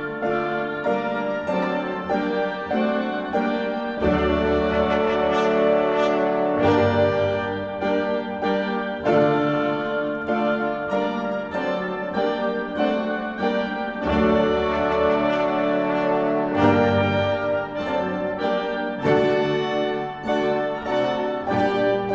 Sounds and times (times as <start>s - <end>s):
Music: 0.0s - 22.1s.